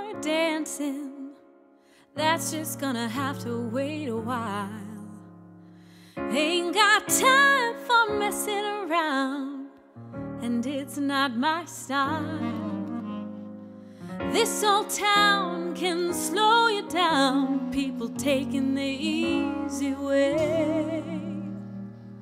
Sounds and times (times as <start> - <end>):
Music: 0.0 - 22.2.